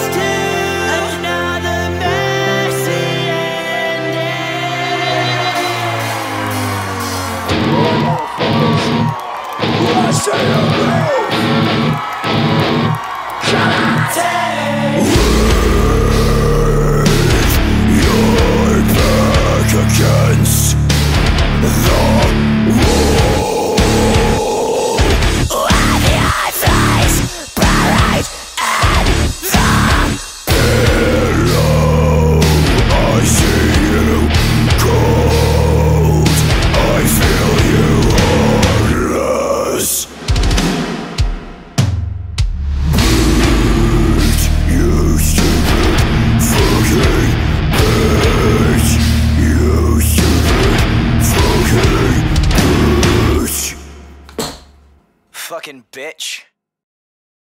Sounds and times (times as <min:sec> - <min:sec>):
Singing: 0:00.0 - 0:11.4, 0:13.0 - 0:40.1, 0:43.0 - 0:53.9.